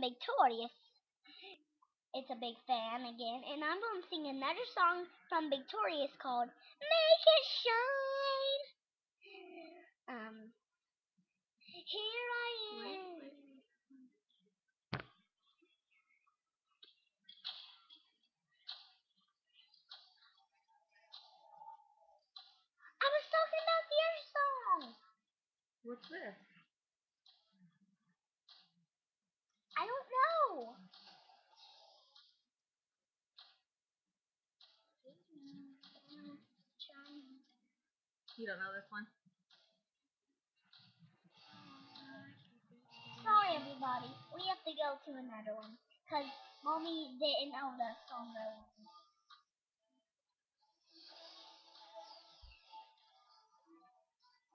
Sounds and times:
Speech: 0.0s - 0.8s, 2.2s - 8.7s, 11.7s - 13.7s, 23.0s - 25.0s, 35.4s - 37.5s, 38.4s - 39.1s.

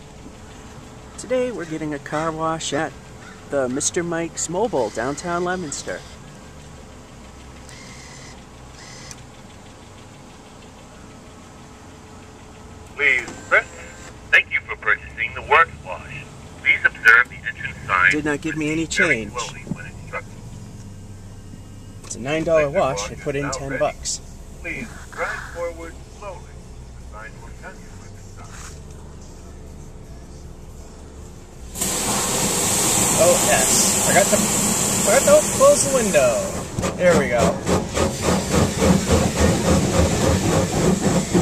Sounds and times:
Speech: 13.0s - 20.3s, 22.1s - 26.5s, 35.1s - 37.6s.

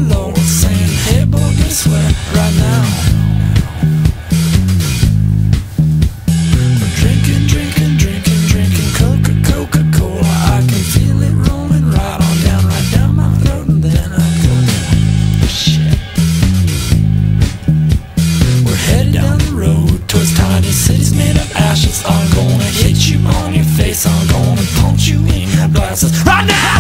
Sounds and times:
Music: 0.0s - 26.8s.

